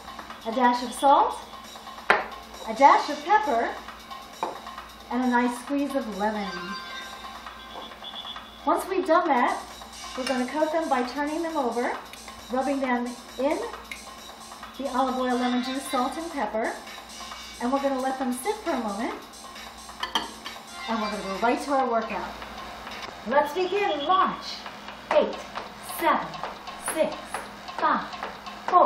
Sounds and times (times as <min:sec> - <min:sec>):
Music: 0:00.0 - 0:28.8.